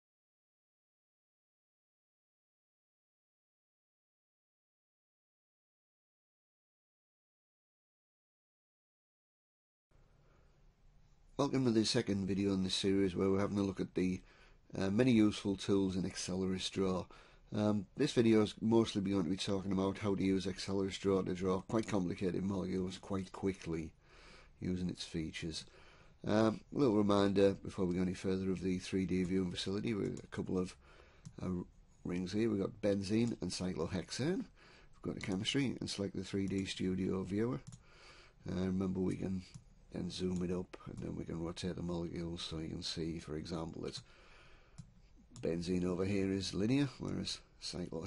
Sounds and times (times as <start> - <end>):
Speech: 11.4 - 24.0, 24.6 - 30.8, 31.4 - 37.7, 38.4 - 44.1, 45.4 - 48.0.